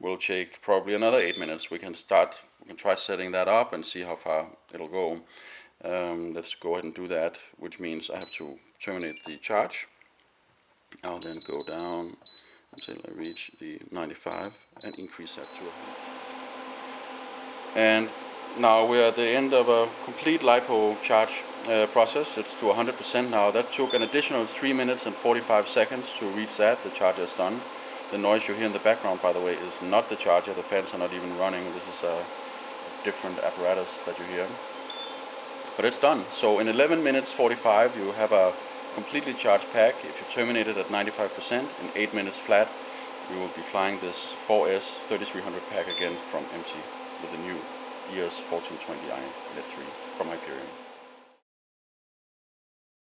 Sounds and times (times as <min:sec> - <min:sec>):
Speech: 0:00.0 - 0:09.9, 0:11.0 - 0:12.2, 0:12.8 - 0:15.7, 0:17.8 - 0:32.3, 0:33.0 - 0:34.6, 0:35.8 - 0:50.7.